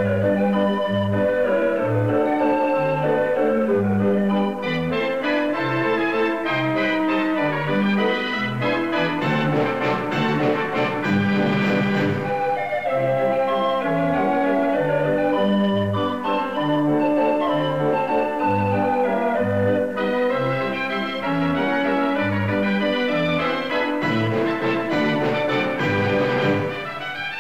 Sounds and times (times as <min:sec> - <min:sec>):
Music: 0:00.0 - 0:27.4.